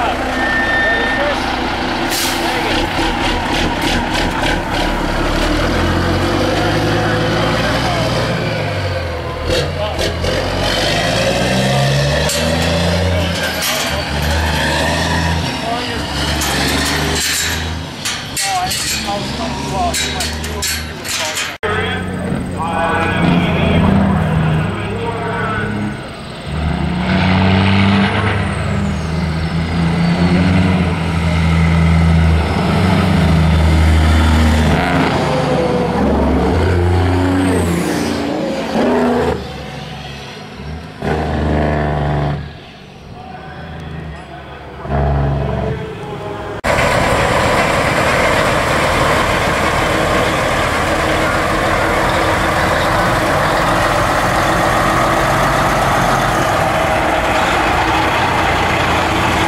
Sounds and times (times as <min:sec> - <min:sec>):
Truck: 0:00.0 - 0:59.4
Speech: 0:06.6 - 0:08.2, 0:09.6 - 0:10.2, 0:15.6 - 0:16.2, 0:18.3 - 0:26.0, 0:43.1 - 0:44.8.